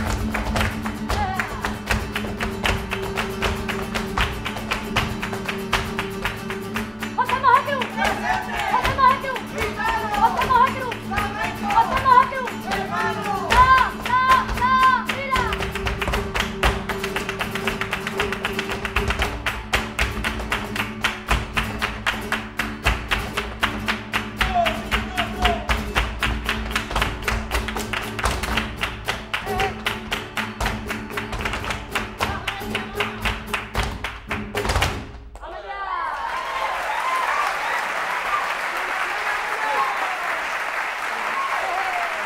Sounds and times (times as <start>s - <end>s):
Flamenco: 0.0s - 35.6s.